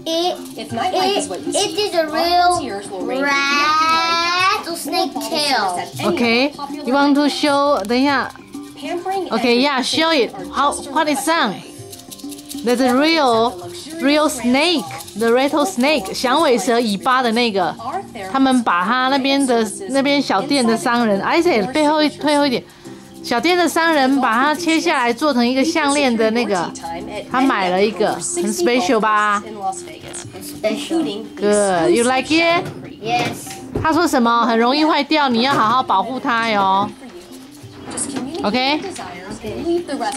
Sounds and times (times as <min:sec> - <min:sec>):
Music: 0:00.0 - 0:40.1.